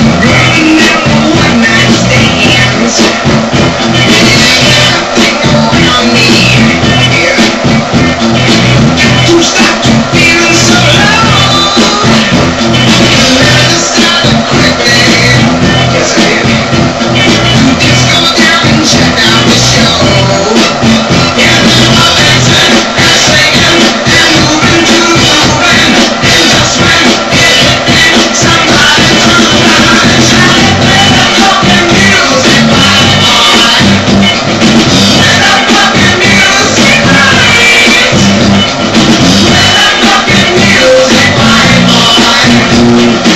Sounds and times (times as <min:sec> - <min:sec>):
Funk: 0:00.0 - 0:43.3.